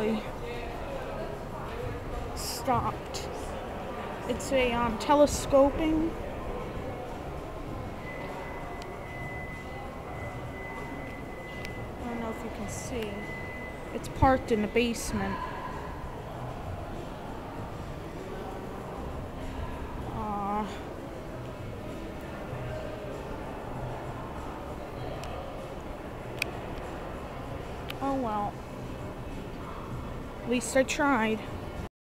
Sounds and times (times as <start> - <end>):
Speech: 0.0 - 6.2, 14.0 - 15.5, 20.0 - 20.9, 28.0 - 28.6.